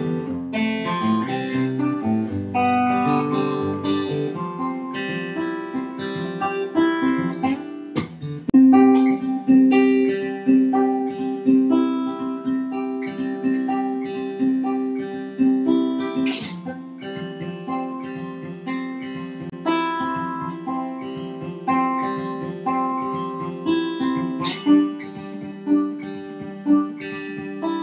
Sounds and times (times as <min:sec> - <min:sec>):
Ukulele: 0:01.1 - 0:18.0.